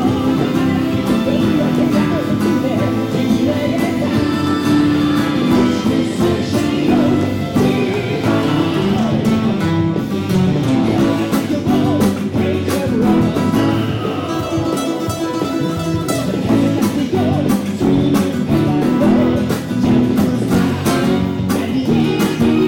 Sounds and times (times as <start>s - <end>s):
Strum: 0.0s - 22.6s.